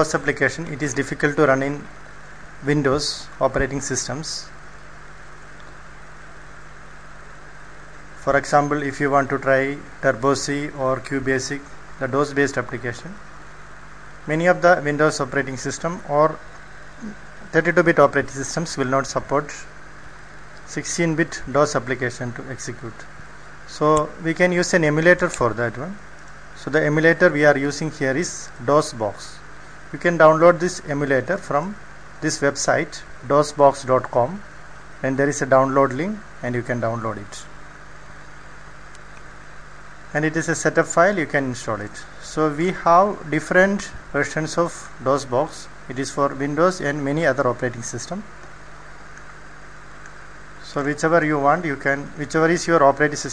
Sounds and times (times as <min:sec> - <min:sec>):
Speech: 0:00.0 - 0:01.9, 0:02.6 - 0:04.6, 0:08.2 - 0:13.2, 0:14.3 - 0:16.4, 0:17.0 - 0:19.7, 0:20.7 - 0:23.1, 0:23.7 - 0:26.0, 0:26.6 - 0:37.6, 0:40.1 - 0:48.3, 0:50.6 - 0:53.3.